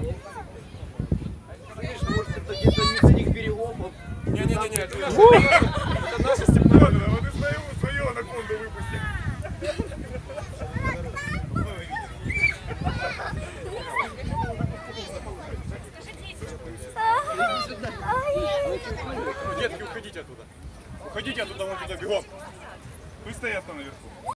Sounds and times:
Outside, urban or manmade: 0.0 - 24.3.

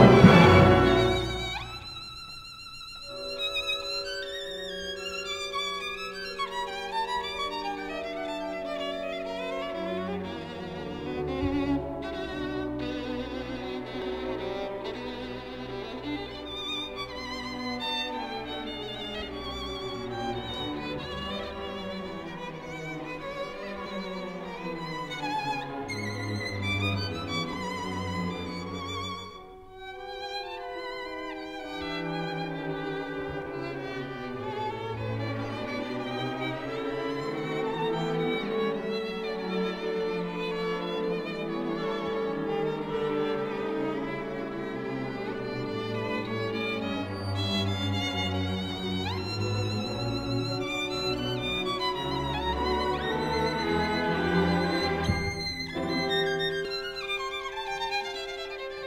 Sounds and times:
Violin, fiddle: 0.0 - 58.8.

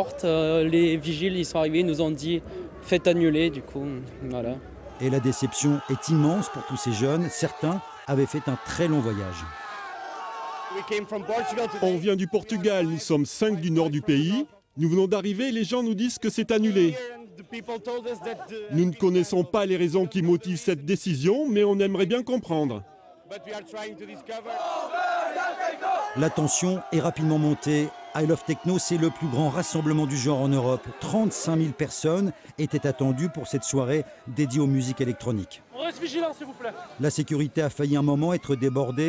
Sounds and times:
Speech: 0.0 - 9.5, 10.8 - 24.5, 26.2 - 39.0.

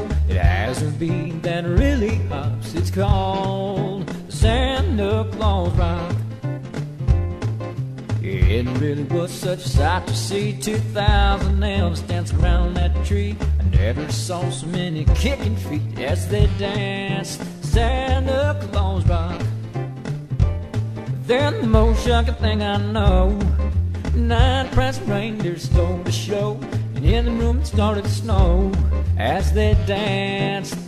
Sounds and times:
Music: 0.0 - 30.8.

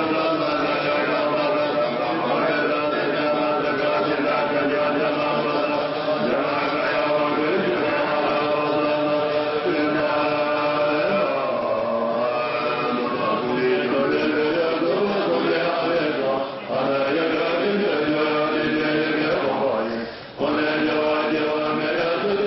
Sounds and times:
Chant: 0.0 - 22.4.

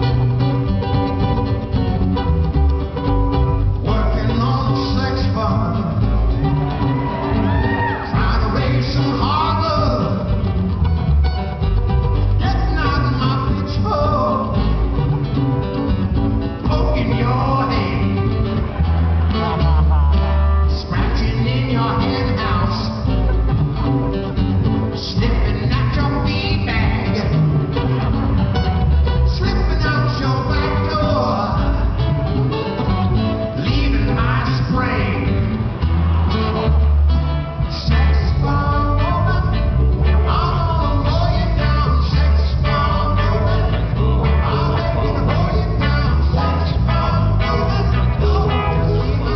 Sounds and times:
Music: 0.0 - 49.3.

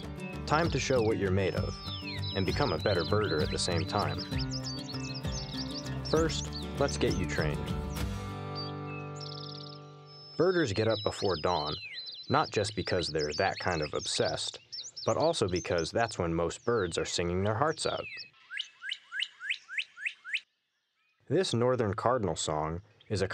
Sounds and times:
Chirp, tweet: 0.0 - 21.3.

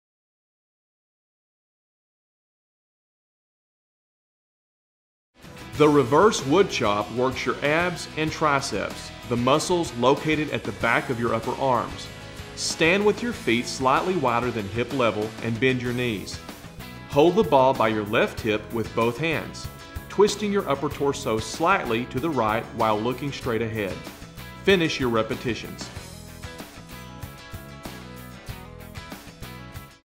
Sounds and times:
Music: 5.4 - 30.0
Speech: 5.8 - 16.4, 17.1 - 24.1, 24.7 - 26.0.

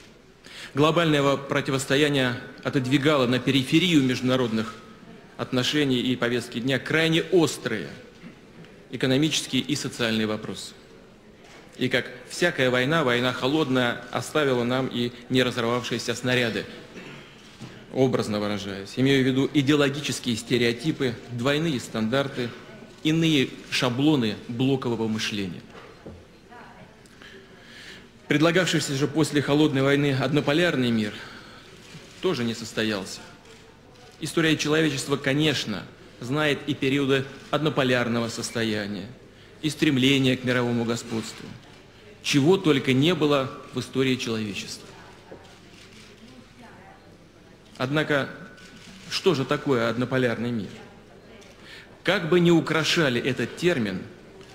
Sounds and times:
Narration, monologue: 0.0 - 54.5.

